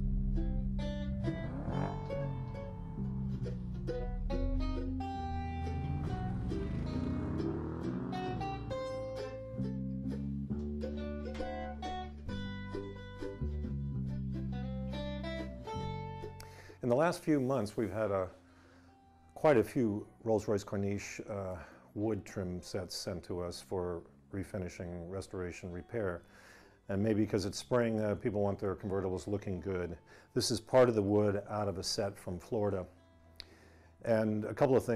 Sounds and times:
Speech: 16.8s - 18.4s, 19.4s - 26.2s, 26.9s - 32.9s, 34.0s - 34.9s.

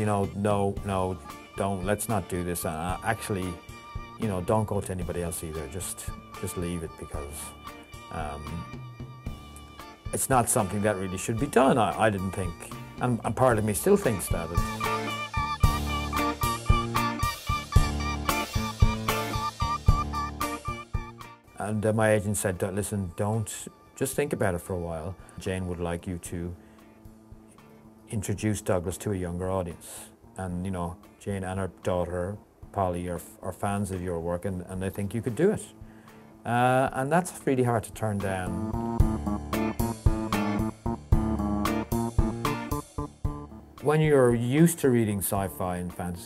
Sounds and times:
Speech: 0.0s - 3.6s, 4.2s - 8.7s, 10.1s - 14.7s, 21.6s - 26.6s, 28.1s - 35.8s, 36.4s - 38.6s, 43.8s - 46.2s
Music: 0.0s - 46.2s.

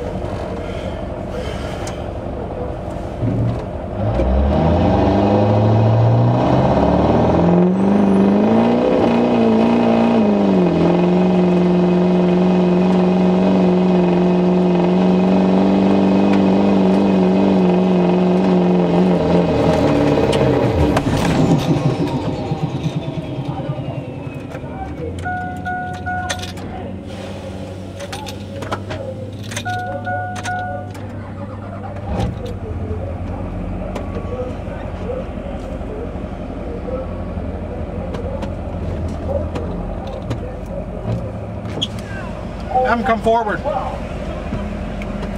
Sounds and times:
Car: 0.0s - 45.3s.

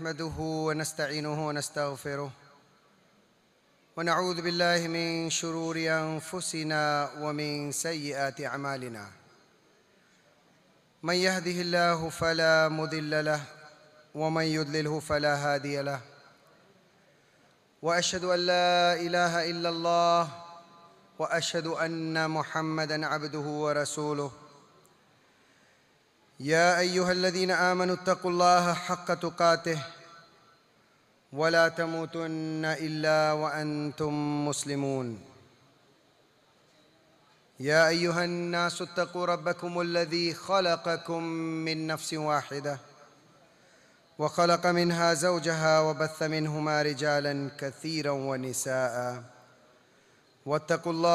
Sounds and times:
Male speech, man speaking: 0.0s - 2.4s, 4.0s - 9.2s, 11.0s - 16.2s, 17.8s - 20.6s, 21.2s - 24.6s, 26.4s - 30.1s, 31.4s - 35.4s, 37.6s - 42.9s, 44.2s - 49.4s, 50.4s - 51.1s
Narration, monologue: 0.0s - 51.1s.

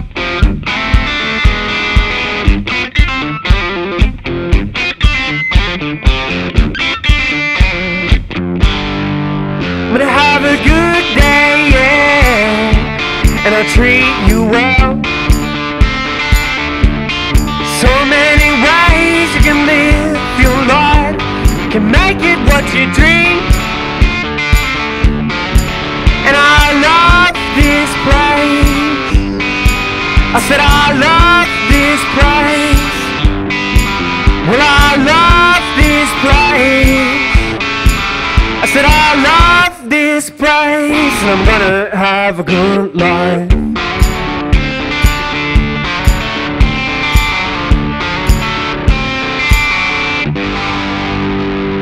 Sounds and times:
Music: 0.0s - 51.8s.

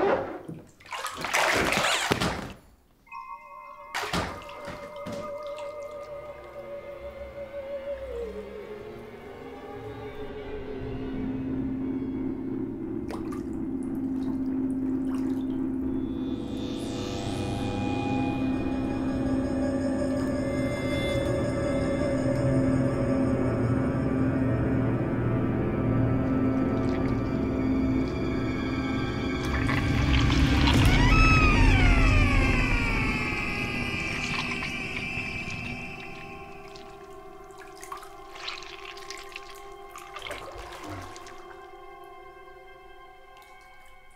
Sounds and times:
Music: 3.0s - 44.1s.

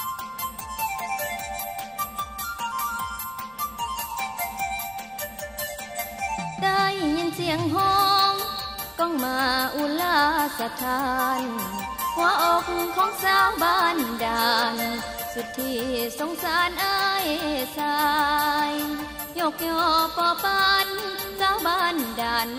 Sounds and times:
Music: 0.0s - 22.5s.

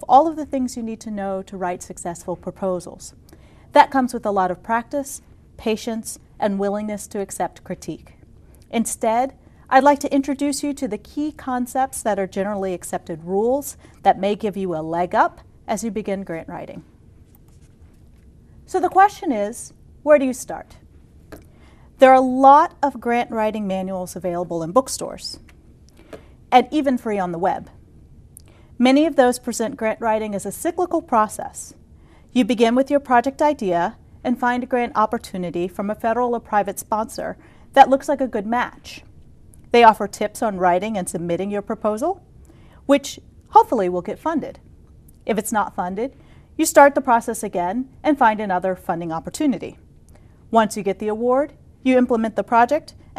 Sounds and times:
Speech: 0.0s - 16.8s, 18.7s - 20.8s, 22.0s - 25.4s, 26.5s - 27.7s, 28.8s - 31.8s, 32.4s - 39.1s, 39.7s - 42.2s, 42.9s - 44.6s, 45.2s - 49.8s, 50.5s - 53.0s.

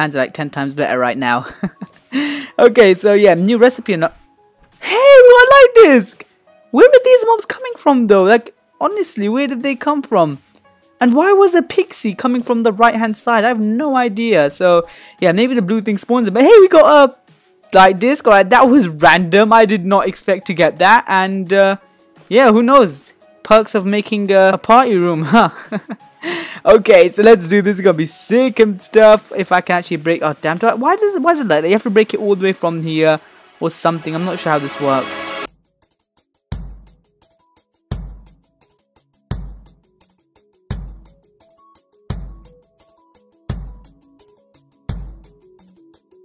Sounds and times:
Narration, monologue: 0.0s - 35.5s.

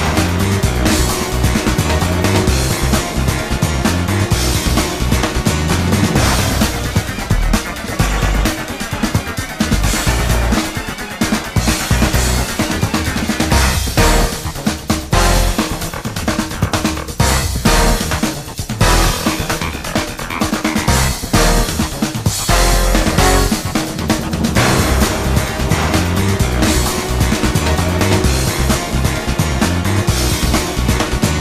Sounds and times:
Video game music: 0.0s - 31.4s.

